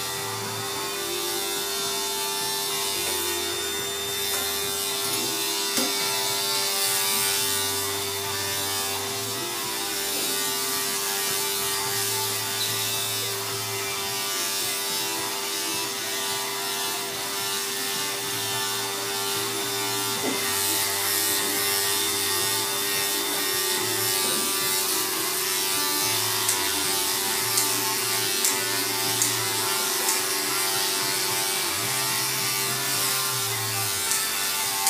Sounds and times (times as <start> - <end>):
Electric shaver, electric razor: 0.0 - 34.8
Scissors: 28.4 - 28.6, 30.0 - 30.3, 34.0 - 34.8.